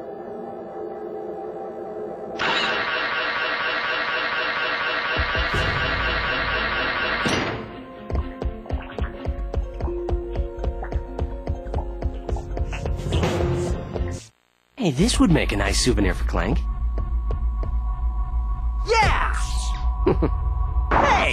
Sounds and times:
Speech: 0:14.8 - 0:16.6, 0:21.0 - 0:21.3.

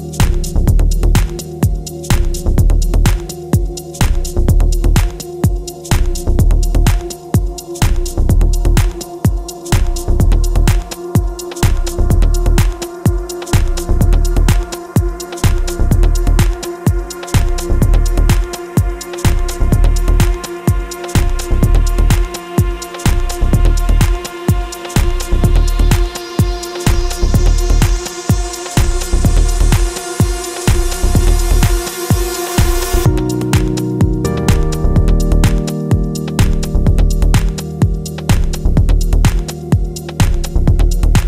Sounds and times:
Soundtrack music: 0:16.4 - 0:41.2.

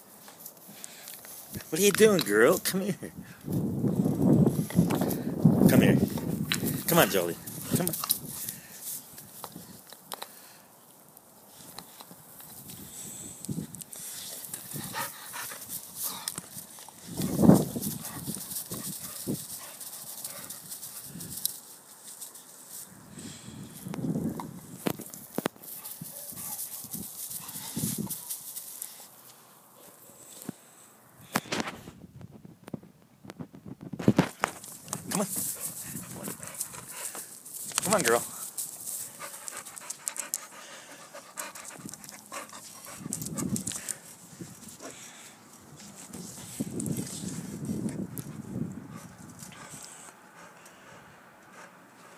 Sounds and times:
Speech: 0:01.7 - 0:03.1, 0:05.7 - 0:06.1, 0:06.9 - 0:08.0, 0:37.8 - 0:38.3.

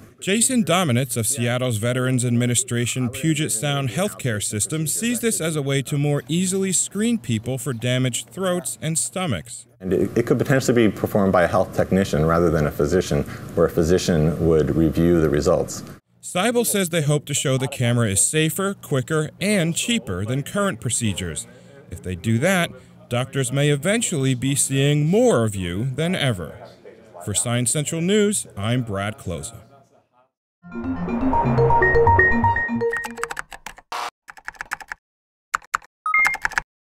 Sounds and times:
Speech: 0:00.1 - 0:30.3
Music: 0:30.6 - 0:33.2.

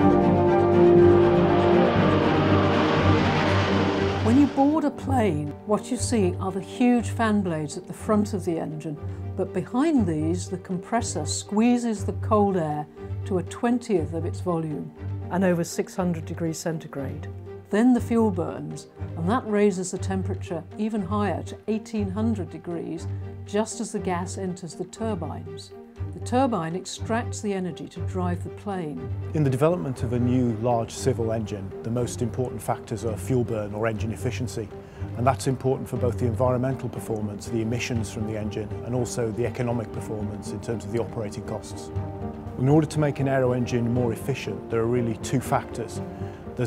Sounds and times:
Music: 0:00.0 - 0:46.6
Speech: 0:04.3 - 0:41.9, 0:42.6 - 0:46.0.

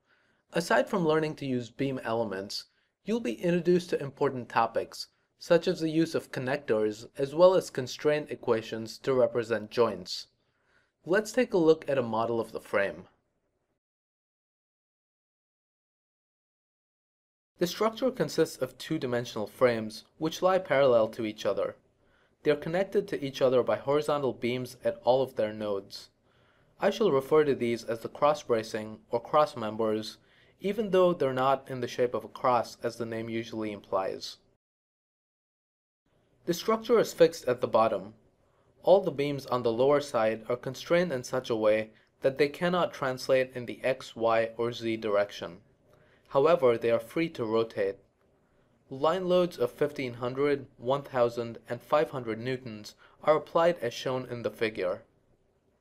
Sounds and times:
Speech: 0:00.5 - 0:10.4, 0:11.1 - 0:13.2, 0:17.6 - 0:21.8, 0:22.4 - 0:26.2, 0:26.8 - 0:34.6, 0:36.5 - 0:38.2, 0:38.8 - 0:45.6, 0:46.3 - 0:48.0, 0:48.9 - 0:55.1.

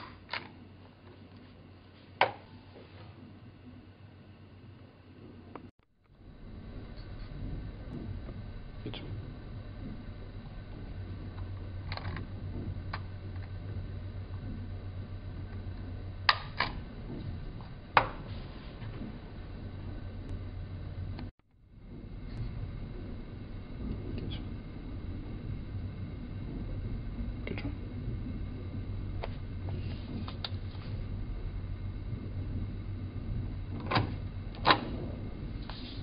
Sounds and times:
Speech: 0:08.8 - 0:09.3, 0:27.4 - 0:27.8.

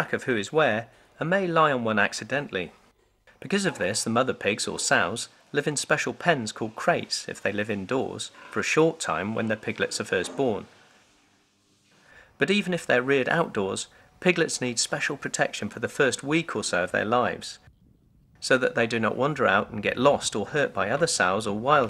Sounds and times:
Speech: 0:00.0 - 0:02.8, 0:03.4 - 0:10.7, 0:12.4 - 0:17.7, 0:18.4 - 0:21.8.

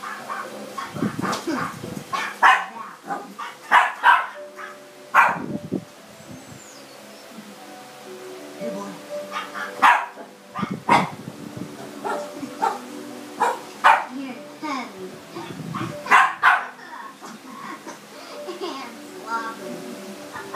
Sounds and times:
Yip: 0:00.0 - 0:05.4, 0:09.3 - 0:11.1, 0:12.0 - 0:12.8, 0:13.4 - 0:14.1, 0:15.8 - 0:16.7
Music: 0:00.0 - 0:20.5
Bow-wow: 0:01.2 - 0:05.4, 0:09.3 - 0:11.1, 0:12.0 - 0:12.8, 0:13.4 - 0:14.1, 0:15.8 - 0:16.7.

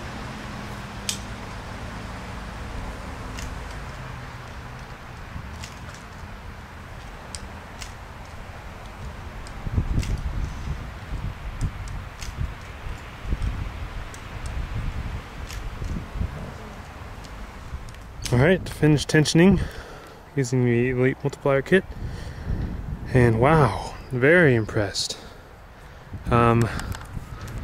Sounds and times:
Rustling leaves: 0:00.0 - 0:27.6
Speech: 0:18.3 - 0:19.6, 0:20.4 - 0:21.8, 0:23.1 - 0:25.3, 0:26.3 - 0:26.8.

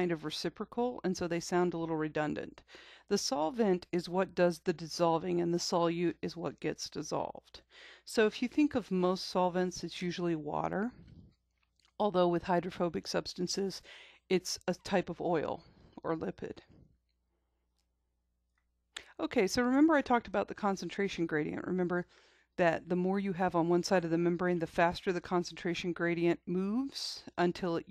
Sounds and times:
Speech: 0:00.0 - 0:11.0, 0:12.0 - 0:16.6, 0:19.0 - 0:27.9.

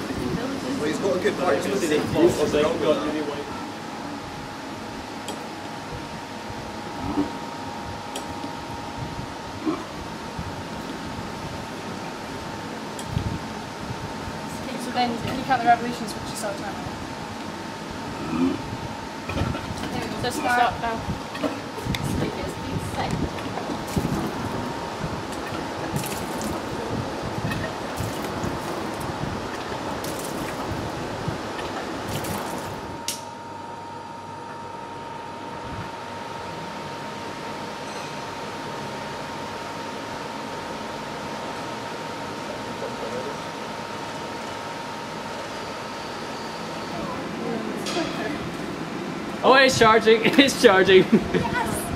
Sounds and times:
Wind: 0:00.0 - 0:51.9.

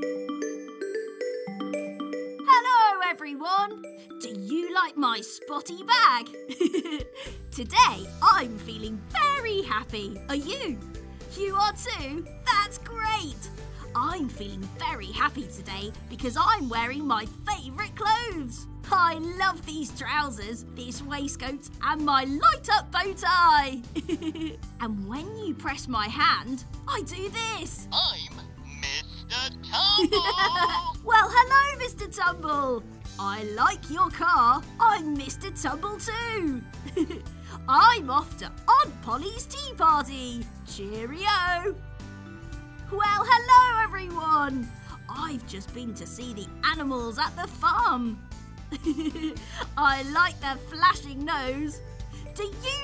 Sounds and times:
Music: 0:00.0 - 0:52.8
Speech: 0:02.5 - 0:06.3, 0:07.5 - 0:23.8, 0:24.8 - 0:28.4, 0:29.3 - 0:36.6, 0:37.7 - 0:41.8, 0:42.9 - 0:48.2, 0:49.7 - 0:51.8, 0:52.4 - 0:52.8.

